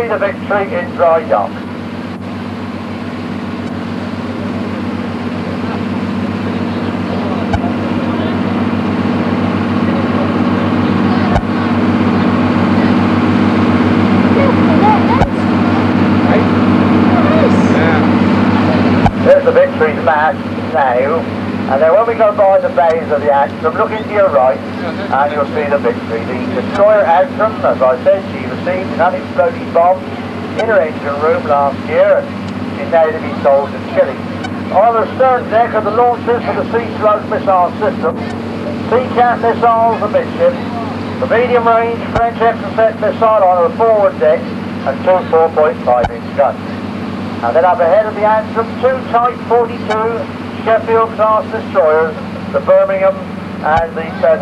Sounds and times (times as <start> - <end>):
Outside, rural or natural: 0.0 - 54.4
Ship: 0.0 - 54.4.